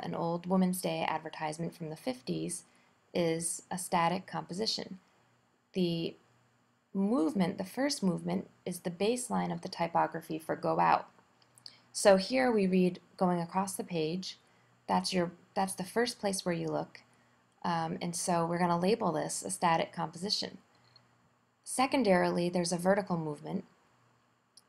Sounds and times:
Speech: 0:00.0 - 0:05.0, 0:05.8 - 0:06.2, 0:07.0 - 0:11.1, 0:11.7 - 0:17.0, 0:17.6 - 0:20.6, 0:21.7 - 0:23.7.

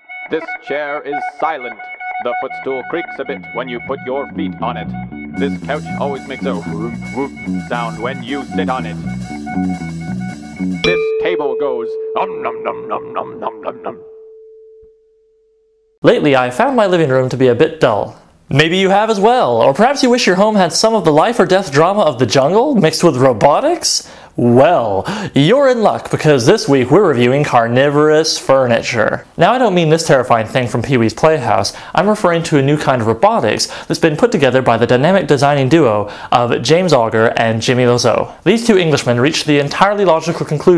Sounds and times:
Tuning fork: 0:10.8 - 0:12.6, 0:14.0 - 0:16.0.

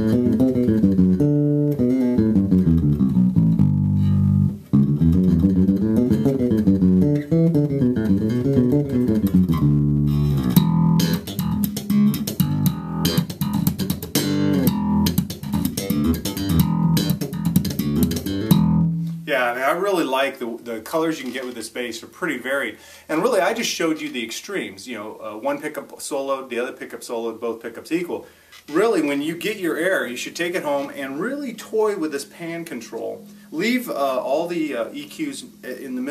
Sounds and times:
Bass guitar: 0:00.0 - 0:19.3
Electric guitar: 0:00.0 - 0:19.3.

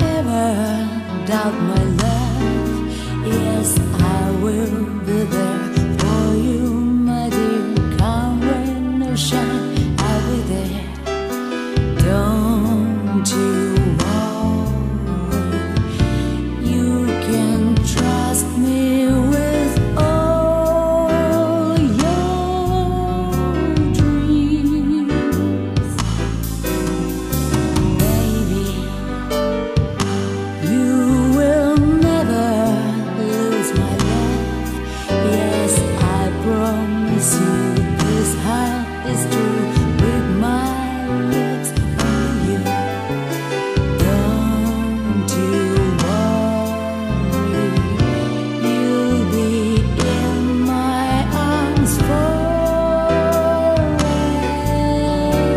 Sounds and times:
Music: 0:00.0 - 0:55.5.

